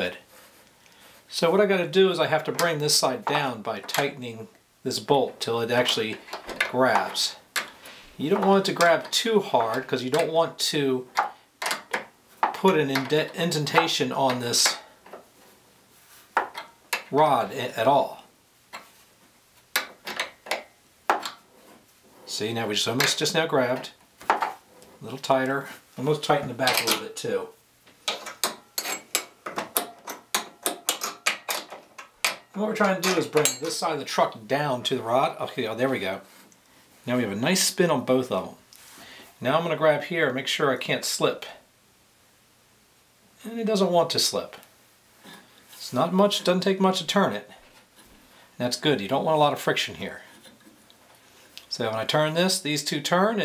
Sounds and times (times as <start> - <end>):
Speech: 0.0 - 0.3, 1.3 - 7.4, 8.2 - 11.1, 12.6 - 14.9, 17.1 - 18.3, 22.3 - 24.0, 25.0 - 27.6, 32.6 - 36.3, 37.0 - 38.6, 39.4 - 41.7, 43.4 - 44.7, 45.8 - 47.6, 48.6 - 50.4, 51.7 - 53.4.